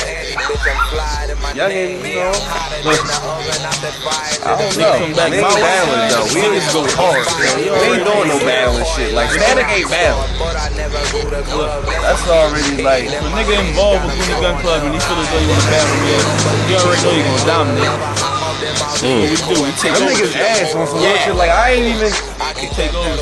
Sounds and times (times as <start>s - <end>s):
Music: 0.0s - 23.2s
Speech: 1.5s - 23.2s.